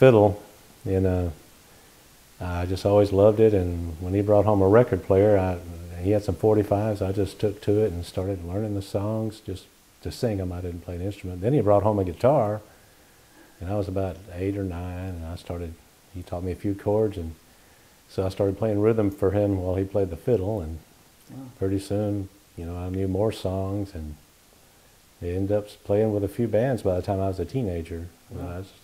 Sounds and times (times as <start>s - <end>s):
Speech: 0.0s - 1.4s, 2.4s - 12.7s, 13.6s - 17.4s, 18.1s - 24.2s, 25.2s - 28.8s.